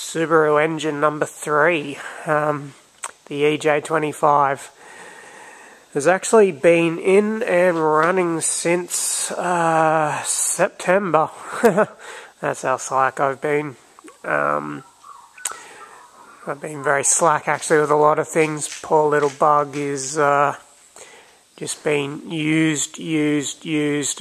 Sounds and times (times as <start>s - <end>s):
Speech: 0.0s - 4.8s, 5.9s - 14.8s, 16.4s - 20.7s, 21.6s - 24.2s.